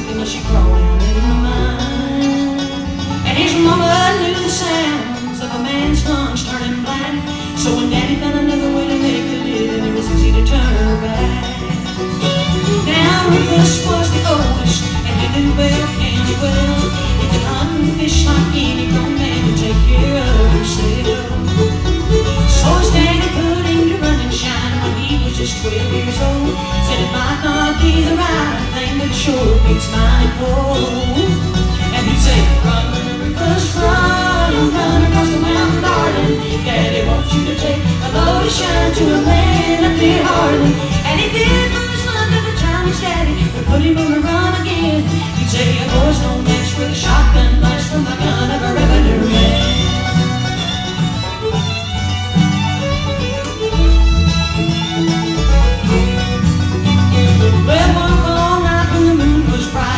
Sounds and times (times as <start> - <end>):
Music: 0.0 - 59.9.